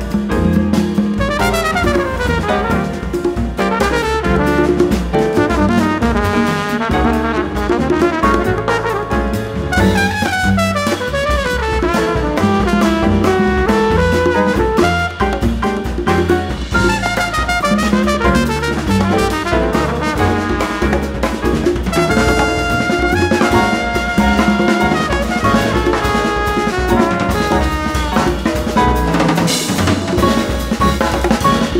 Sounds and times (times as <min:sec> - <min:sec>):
Drum: 0:00.0 - 0:31.8
Jazz: 0:00.0 - 0:31.8.